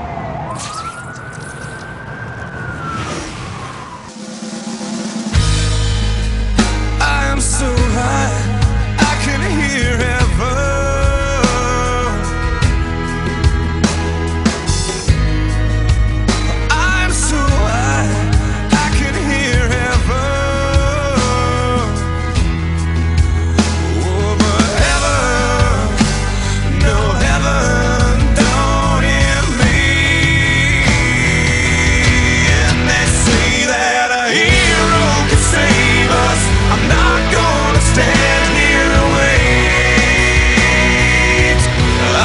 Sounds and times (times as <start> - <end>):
Pop music: 5.4 - 42.2.